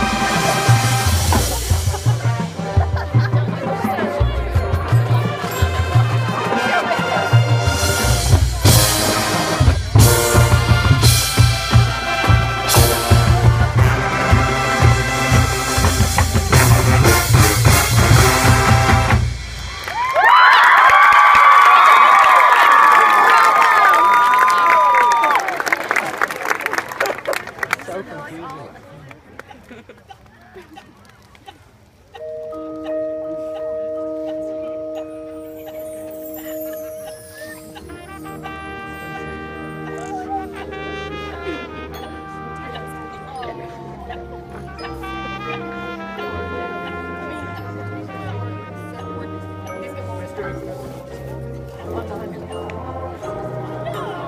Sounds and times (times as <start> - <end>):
Music: 0.0 - 20.6, 32.2 - 54.2
Speech: 3.2 - 5.6, 27.8 - 29.7, 39.7 - 54.2.